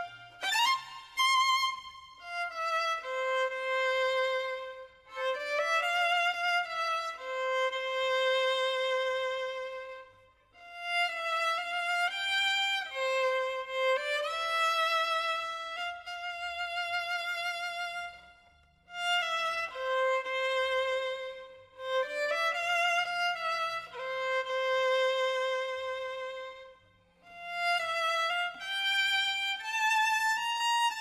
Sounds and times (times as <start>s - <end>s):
Violin, fiddle: 0.0s - 31.0s.